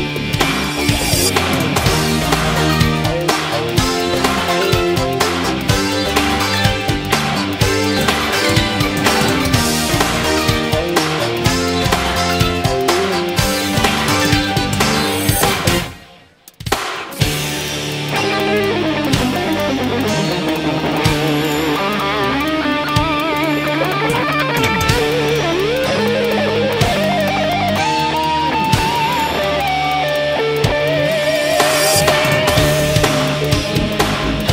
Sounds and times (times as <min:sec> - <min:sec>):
Music: 0:00.0 - 0:34.5.